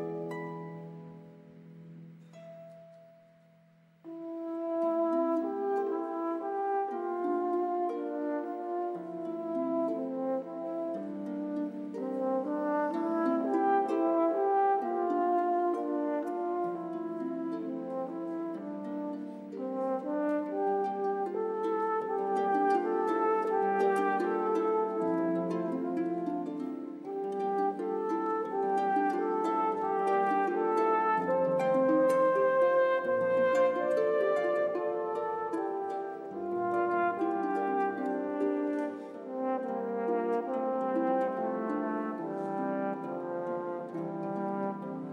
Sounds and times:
French horn: 0.0 - 1.6, 4.1 - 45.1.

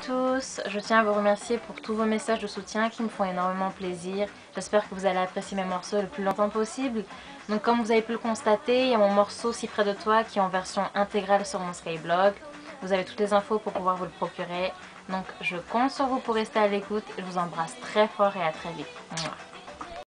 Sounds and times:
Speech: 0.0 - 19.4
Music: 0.0 - 20.0.

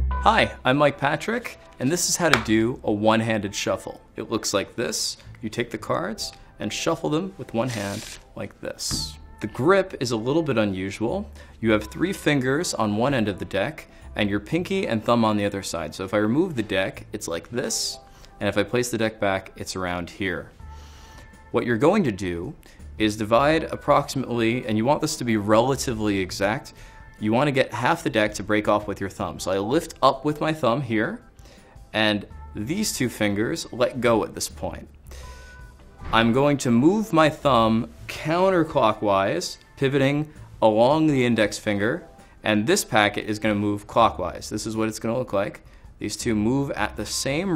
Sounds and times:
Speech: 0.3 - 20.5, 21.6 - 31.2, 32.0 - 34.9, 36.1 - 47.5.

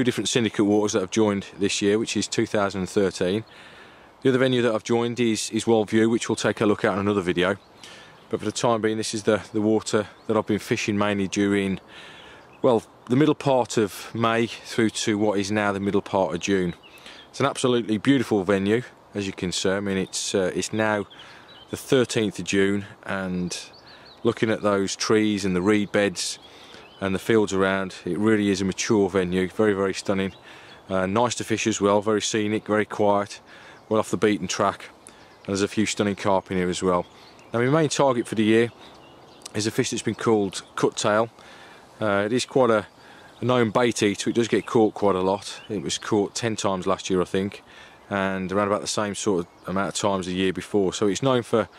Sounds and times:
Speech: 0.0 - 3.5, 4.2 - 7.6, 8.3 - 11.9, 12.6 - 38.8, 39.4 - 41.4, 42.0 - 51.7.

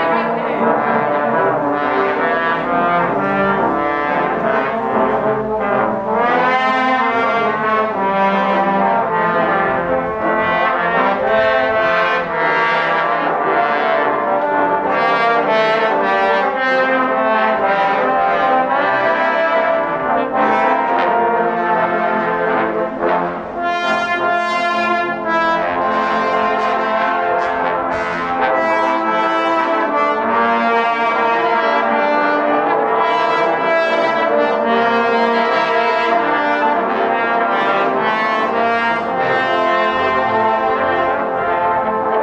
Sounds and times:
Music: 0.0 - 42.2.

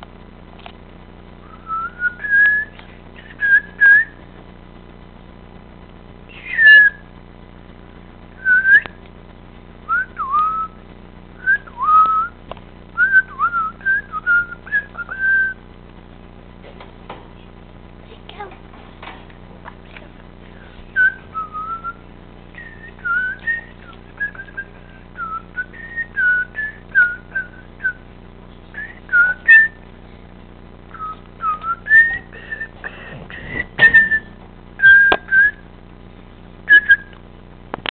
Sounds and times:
Whistling: 1.4 - 4.2, 6.3 - 7.1, 8.4 - 9.0, 9.9 - 10.8, 11.4 - 12.4, 13.0 - 15.6, 20.6 - 22.0, 22.6 - 28.0, 28.8 - 29.8, 30.9 - 35.6, 36.7 - 37.2.

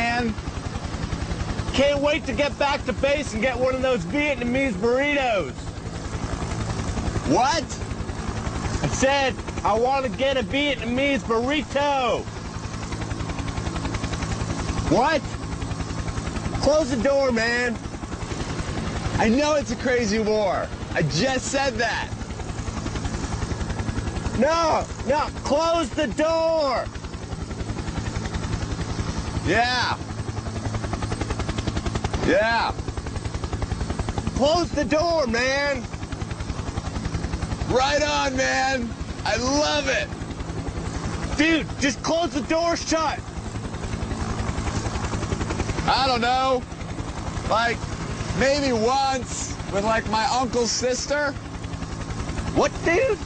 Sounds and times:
Speech: 0.0 - 0.4, 1.7 - 5.6, 7.3 - 7.8, 8.8 - 12.3, 14.9 - 15.3, 16.6 - 17.8, 19.2 - 22.2, 24.4 - 26.9, 29.5 - 30.1, 32.2 - 32.8, 34.3 - 35.9, 37.7 - 40.1, 41.4 - 43.2, 45.8 - 46.6, 47.5 - 47.8, 48.4 - 51.4, 52.5 - 53.2.

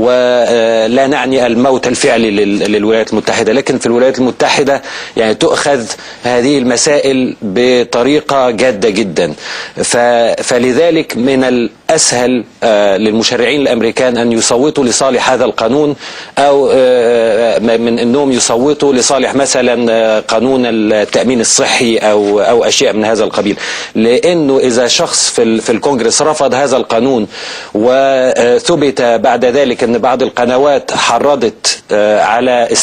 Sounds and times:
Male speech, man speaking: 0.0 - 32.8
Narration, monologue: 0.0 - 32.8.

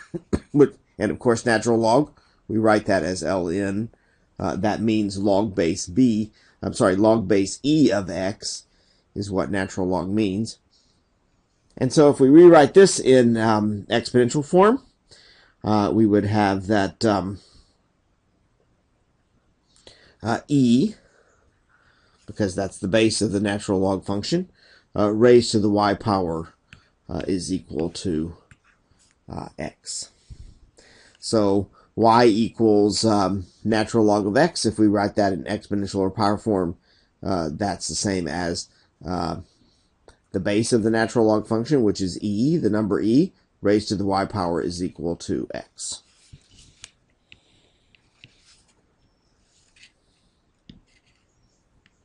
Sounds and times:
Speech: 0.0 - 10.6, 11.8 - 14.9, 15.6 - 17.5, 20.2 - 21.0, 22.3 - 28.5, 29.3 - 30.2, 31.2 - 39.5, 40.3 - 46.1.

